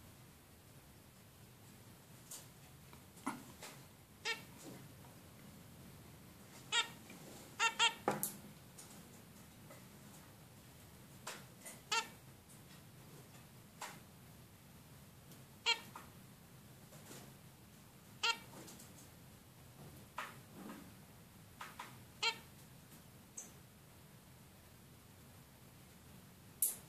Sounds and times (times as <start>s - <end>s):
Bird: 4.2s - 4.5s, 6.7s - 7.0s, 7.6s - 8.1s, 11.8s - 12.2s, 15.6s - 16.0s, 18.2s - 18.5s, 21.7s - 22.5s
Domestic animals, pets: 4.2s - 4.7s, 6.6s - 8.0s, 11.7s - 12.2s, 15.6s - 16.0s, 18.2s - 18.6s, 21.8s - 22.5s.